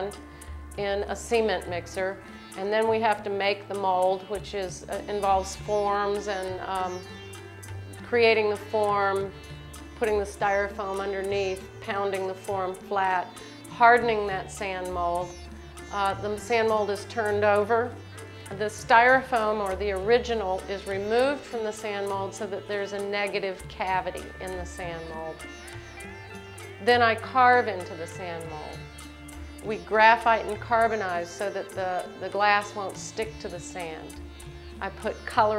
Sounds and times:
Music: 0:00.0 - 0:35.5
Speech: 0:00.8 - 0:07.0, 0:08.1 - 0:09.3, 0:10.0 - 0:15.4, 0:16.0 - 0:17.9, 0:18.5 - 0:25.4, 0:26.8 - 0:28.8, 0:29.7 - 0:34.1, 0:34.8 - 0:35.5.

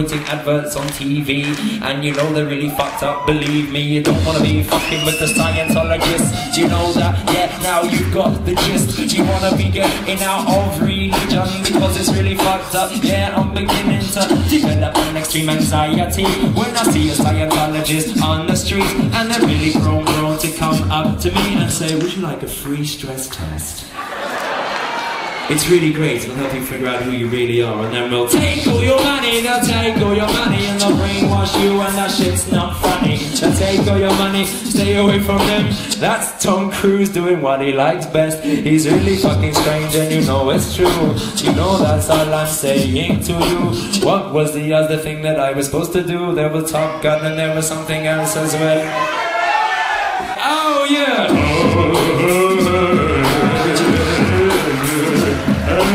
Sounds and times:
Hip hop music: 0:00.0 - 0:23.7, 0:25.5 - 0:55.9
Drum and bass: 0:04.0 - 0:21.9, 0:28.3 - 0:35.8, 0:38.8 - 0:43.8, 0:51.3 - 0:55.9
Speech: 0:21.7 - 0:23.9, 0:25.5 - 0:28.4, 0:44.0 - 0:49.0.

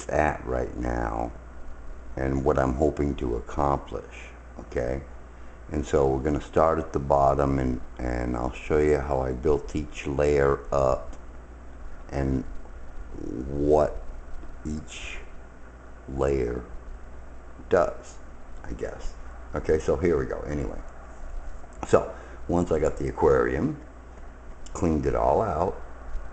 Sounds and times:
Speech: 0:00.0 - 0:01.4, 0:02.2 - 0:05.1, 0:05.7 - 0:11.1, 0:12.1 - 0:14.1, 0:14.7 - 0:15.3, 0:16.1 - 0:16.8, 0:17.6 - 0:20.9, 0:21.8 - 0:23.8, 0:24.7 - 0:25.8.

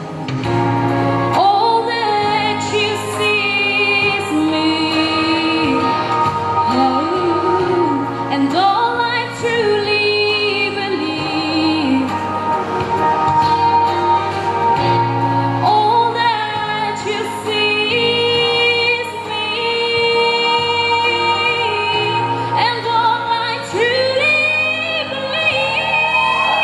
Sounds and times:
Music: 0:00.0 - 0:26.6
Female singing: 0:01.4 - 0:06.0, 0:06.7 - 0:12.2, 0:15.6 - 0:26.6.

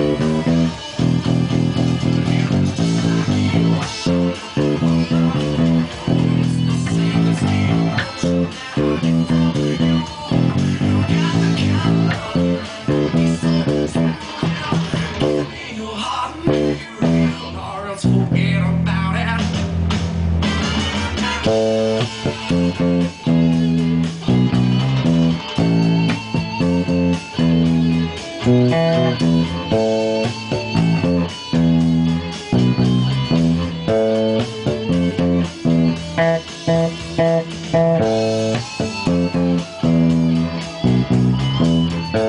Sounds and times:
Bass guitar: 0:00.0 - 0:42.2.

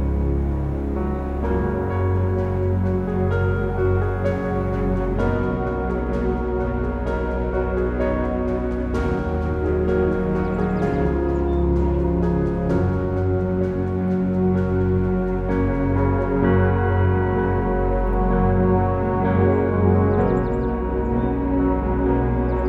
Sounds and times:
Music: 0:00.0 - 0:22.6.

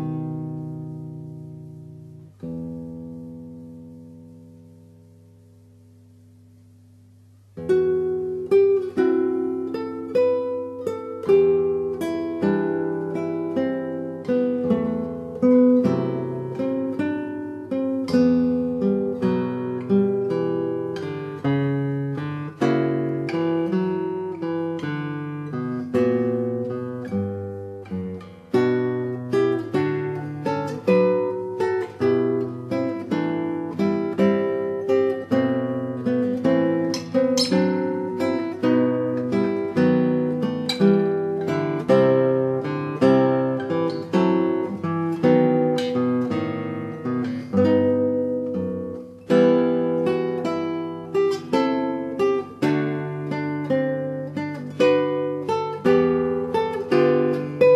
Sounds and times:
Acoustic guitar: 0:00.0 - 0:57.7
Strum: 0:00.0 - 0:57.7.

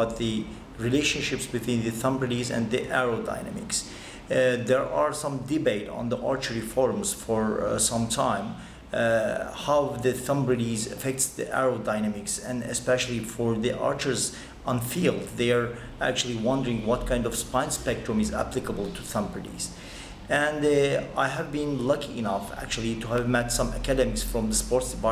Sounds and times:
Speech: 0:00.0 - 0:25.1.

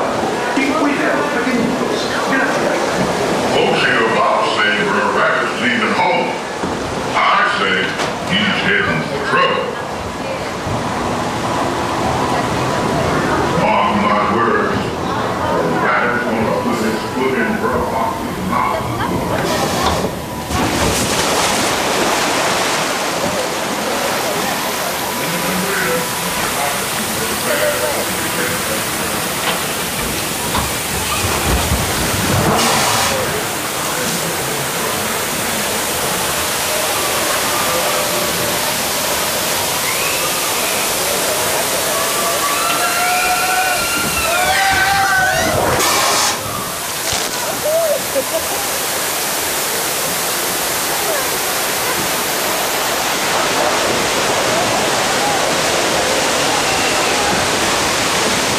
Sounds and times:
Water: 0:00.0 - 0:58.5
Speech: 0:00.4 - 0:06.5, 0:07.1 - 0:10.6, 0:12.2 - 0:20.1, 0:23.8 - 0:29.9.

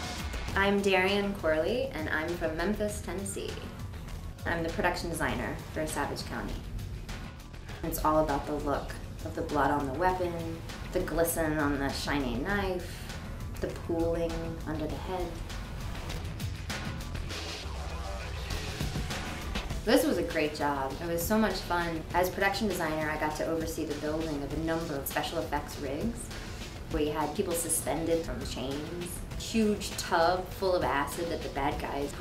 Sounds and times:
Music: 0:00.0 - 0:32.2
Speech: 0:00.6 - 0:03.6, 0:04.4 - 0:06.6, 0:07.8 - 0:13.0, 0:13.6 - 0:15.4, 0:19.9 - 0:26.3, 0:26.9 - 0:32.2.

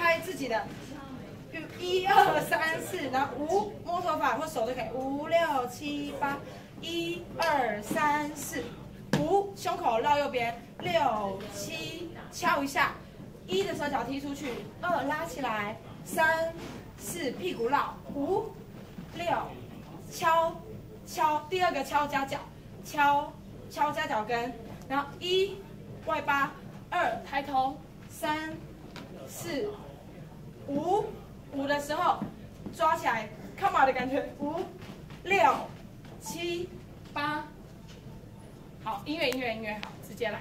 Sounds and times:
Speech: 0:00.0 - 0:40.4.

